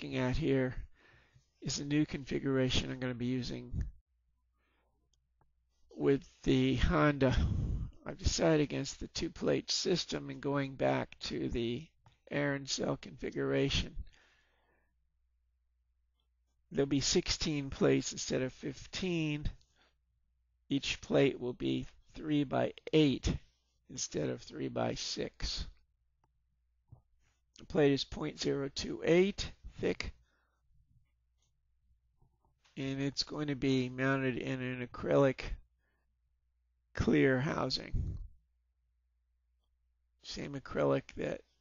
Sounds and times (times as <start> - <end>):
Speech: 0.0 - 0.9, 1.6 - 4.0, 6.0 - 14.1, 16.8 - 19.6, 20.7 - 25.8, 27.6 - 30.2, 32.8 - 35.7, 37.0 - 38.3, 40.2 - 41.5.